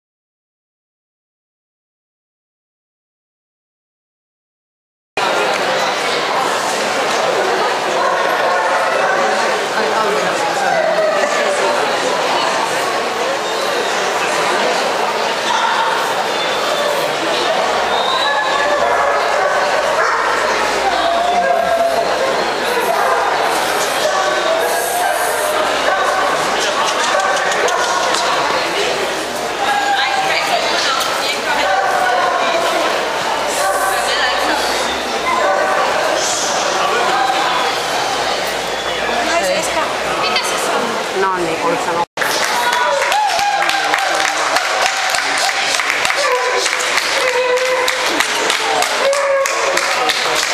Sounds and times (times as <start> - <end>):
Speech: 5.2 - 50.5.